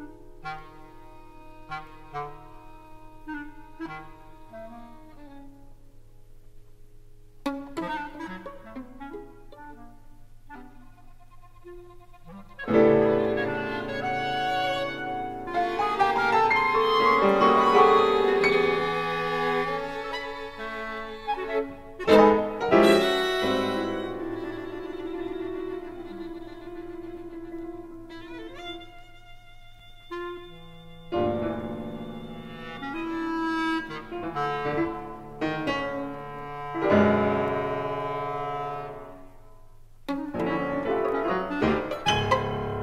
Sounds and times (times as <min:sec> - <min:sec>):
Violin, fiddle: 0:10.6 - 0:37.6, 0:40.2 - 0:42.8.